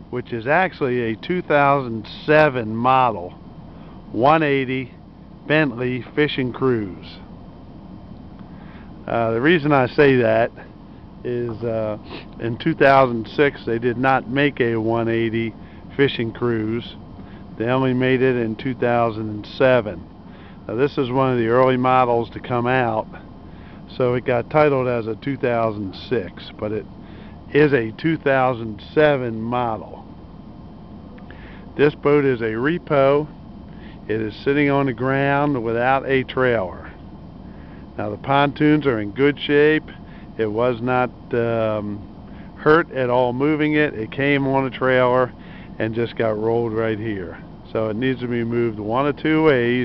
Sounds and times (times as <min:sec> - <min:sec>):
Speech: 0:00.1 - 0:03.4, 0:04.1 - 0:07.3, 0:09.1 - 0:17.0, 0:17.6 - 0:20.0, 0:20.7 - 0:23.2, 0:23.9 - 0:26.9, 0:27.5 - 0:30.0, 0:31.8 - 0:33.3, 0:34.1 - 0:37.0, 0:38.0 - 0:42.0, 0:42.6 - 0:49.8.